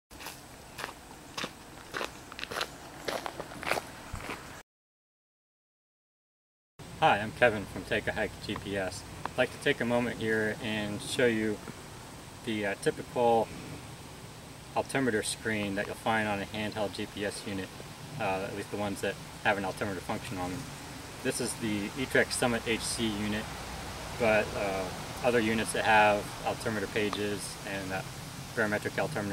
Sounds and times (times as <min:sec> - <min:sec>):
Outside, rural or natural: 0:00.1 - 0:04.6, 0:06.8 - 0:29.3
Speech: 0:07.0 - 0:11.6, 0:12.4 - 0:13.5, 0:14.8 - 0:20.6, 0:21.2 - 0:23.5, 0:24.2 - 0:28.0, 0:28.6 - 0:29.3.